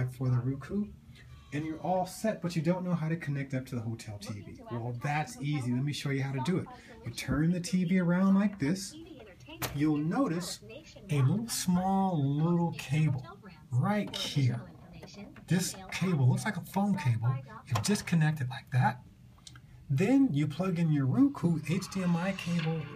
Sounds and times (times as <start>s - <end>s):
Television: 0.0s - 22.9s
Speech: 1.6s - 19.0s, 19.9s - 22.9s.